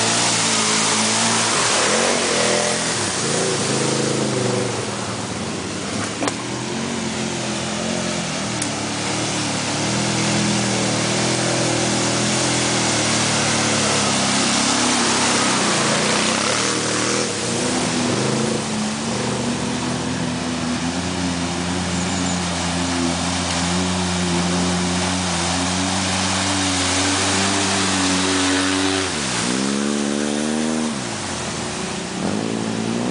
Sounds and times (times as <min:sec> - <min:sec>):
Waterfall: 0:00.0 - 0:33.1.